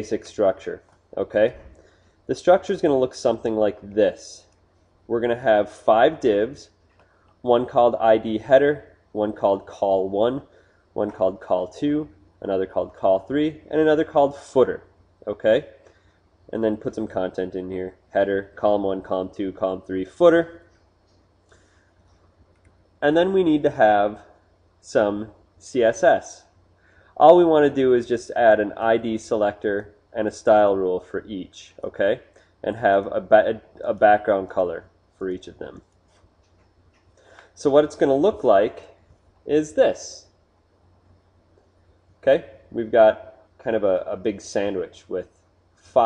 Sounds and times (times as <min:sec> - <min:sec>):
Speech: 0:00.0 - 0:01.7, 0:02.3 - 0:06.8, 0:07.4 - 0:15.8, 0:16.5 - 0:20.7, 0:23.0 - 0:26.6, 0:27.2 - 0:35.8, 0:37.6 - 0:40.3, 0:42.2 - 0:45.3.